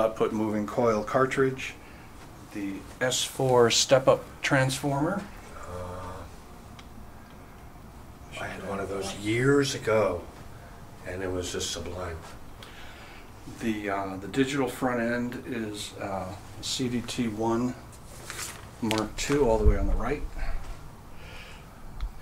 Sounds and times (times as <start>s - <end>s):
Speech: 0.0s - 1.8s, 2.5s - 6.4s, 8.3s - 10.4s, 11.0s - 12.4s, 13.5s - 17.9s, 18.8s - 20.6s.